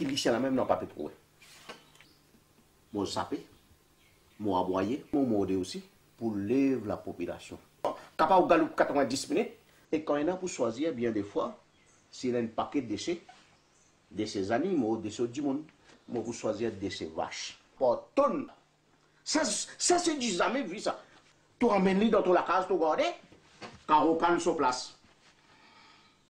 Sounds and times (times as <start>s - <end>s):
Speech: 0.0s - 1.2s, 2.9s - 3.5s, 4.4s - 13.3s, 14.1s - 18.6s, 19.2s - 23.3s, 23.9s - 25.0s.